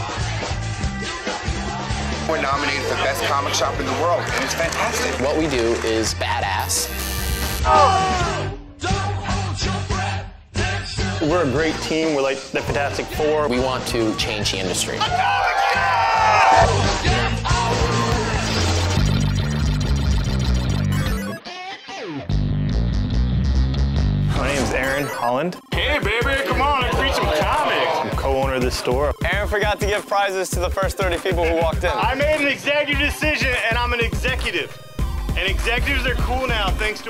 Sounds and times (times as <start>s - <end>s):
Music: 0.0s - 37.0s.